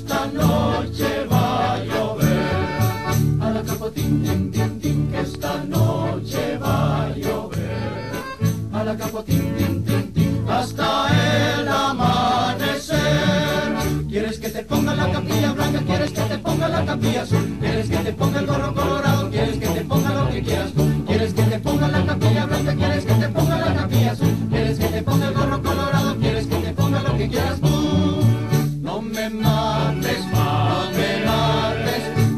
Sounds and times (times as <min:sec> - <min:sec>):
Music: 0:00.0 - 0:32.3.